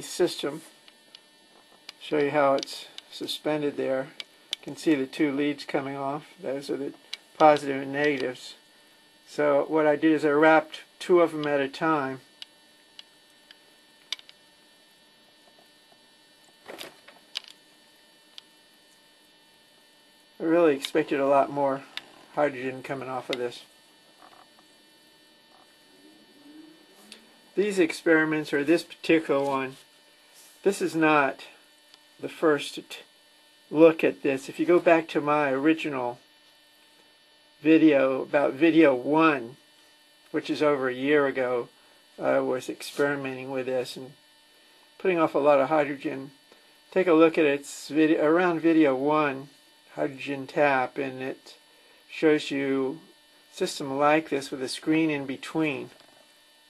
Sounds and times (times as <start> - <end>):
Speech: 0.0 - 0.7, 2.0 - 8.6, 9.3 - 12.2, 20.4 - 23.7, 27.6 - 29.8, 30.6 - 31.6, 32.2 - 33.1, 33.7 - 36.2, 37.6 - 39.6, 40.3 - 44.2, 45.0 - 56.0.